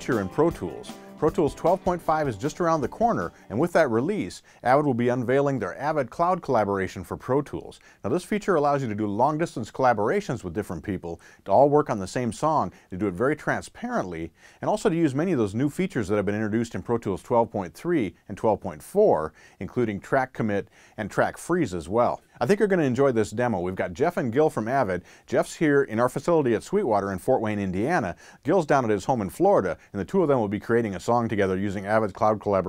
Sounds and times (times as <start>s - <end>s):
Speech: 0.0s - 32.6s.